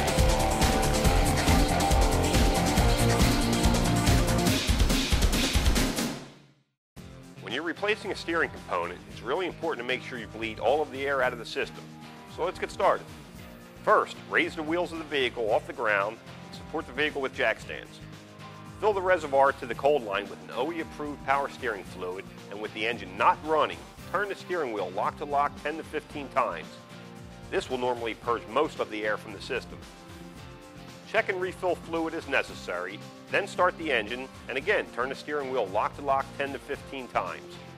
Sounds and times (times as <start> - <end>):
Music: 0.0 - 37.7
Speech: 7.4 - 13.0, 13.9 - 18.0, 18.8 - 26.8, 27.5 - 29.8, 31.1 - 37.6.